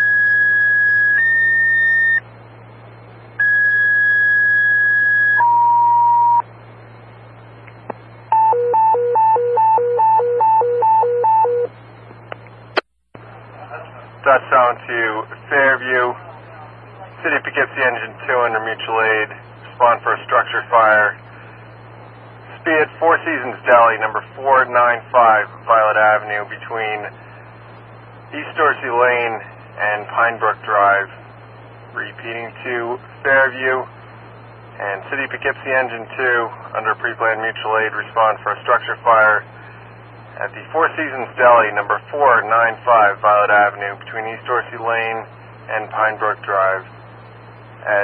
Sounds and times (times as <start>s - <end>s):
Speech: 13.3s - 21.3s, 22.5s - 27.3s, 28.3s - 31.2s, 31.9s - 33.9s, 34.8s - 39.6s, 40.4s - 47.0s, 47.8s - 48.0s.